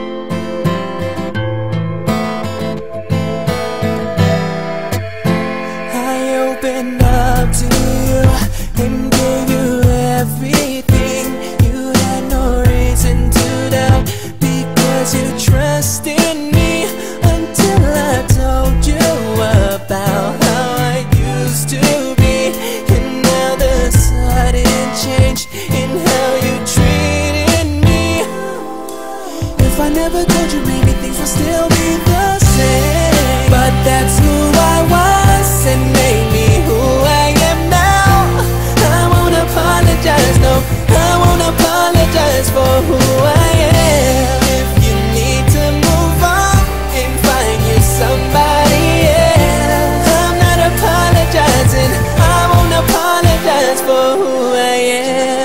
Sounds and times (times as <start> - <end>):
Music: 0.0 - 55.4.